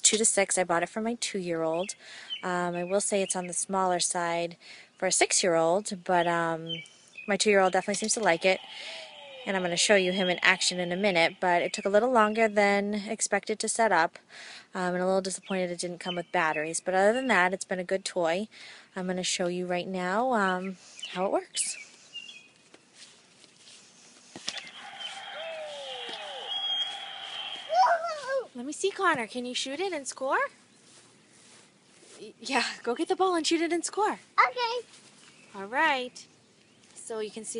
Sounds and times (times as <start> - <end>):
Speech: 0.0 - 14.2, 14.8 - 21.8, 27.7 - 30.5, 32.2 - 34.9, 35.6 - 36.2, 37.0 - 37.5.